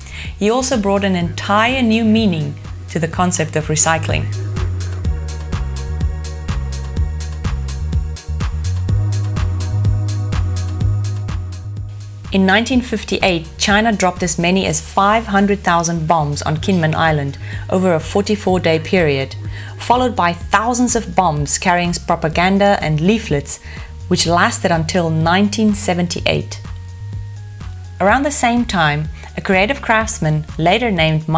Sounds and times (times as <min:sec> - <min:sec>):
Music: 0:00.0 - 0:31.3
Speech: 0:00.4 - 0:04.3, 0:12.4 - 0:26.6, 0:28.0 - 0:31.3.